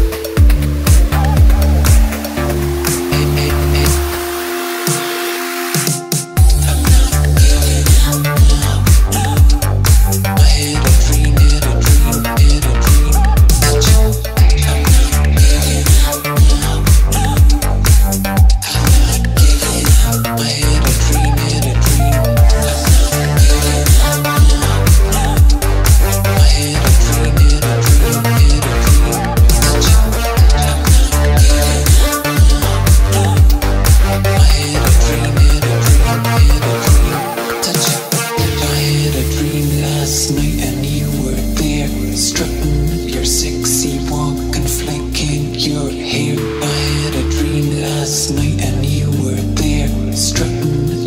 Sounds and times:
Music: 0.0 - 51.0.

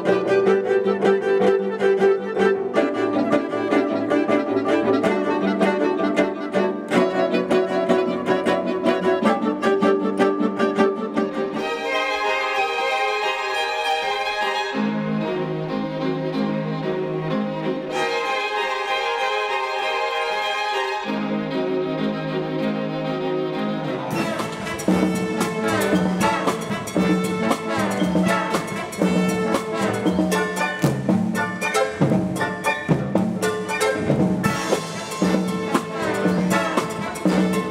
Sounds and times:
Music: 0.0 - 37.7.

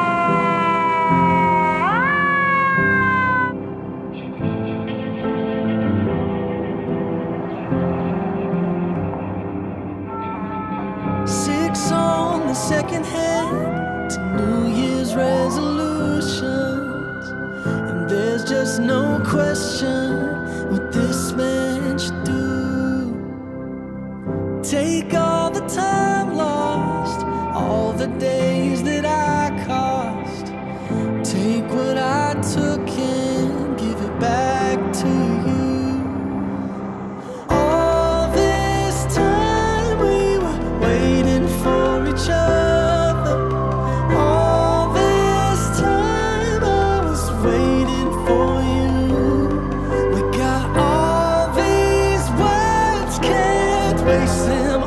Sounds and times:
Music: 0.0 - 54.8.

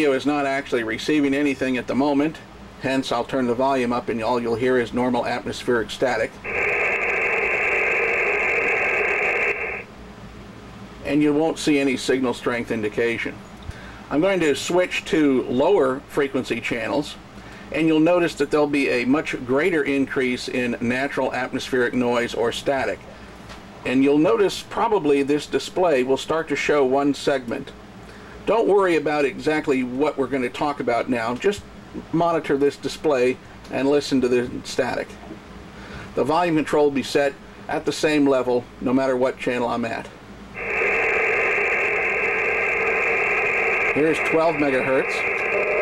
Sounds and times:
Speech: 0.0 - 6.4, 11.0 - 13.4, 14.1 - 23.1, 23.8 - 27.8, 28.4 - 35.2, 36.2 - 40.2, 44.0 - 45.3.

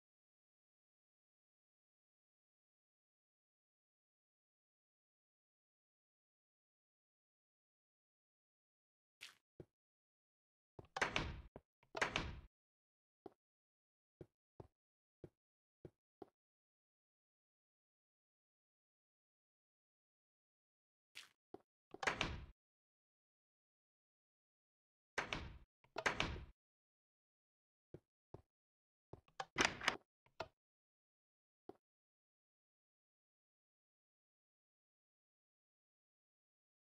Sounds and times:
Door: 22.0 - 22.5, 25.2 - 26.5, 29.4 - 30.0.

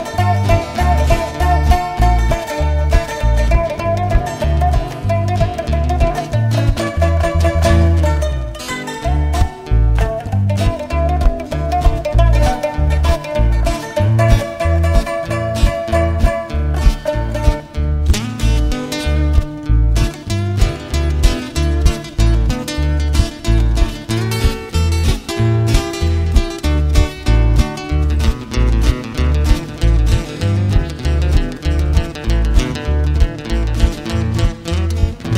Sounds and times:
Music: 0.0 - 35.3.

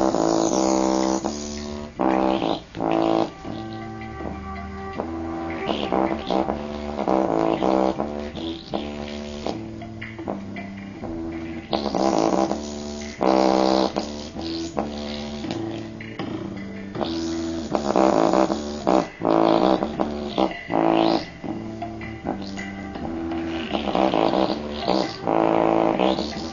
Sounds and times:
Music: 0.0 - 26.5.

